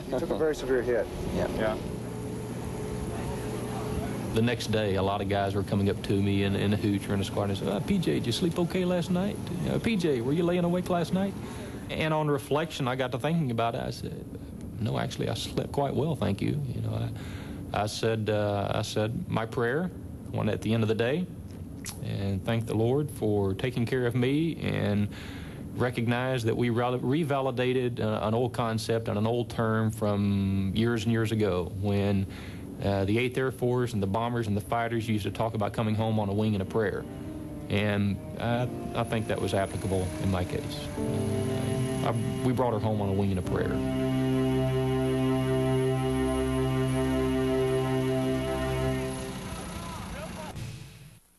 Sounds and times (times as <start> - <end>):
Speech: 0.0 - 1.8, 3.1 - 21.3, 21.9 - 25.1, 25.8 - 37.0, 37.7 - 40.9, 42.0 - 43.8.